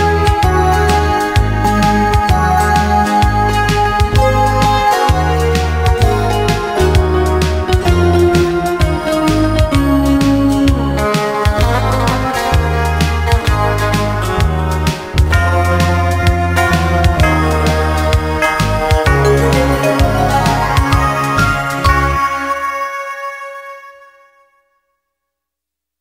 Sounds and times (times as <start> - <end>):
Christian music: 0.0 - 11.6, 14.9 - 23.1
Christmas music: 0.0 - 24.1.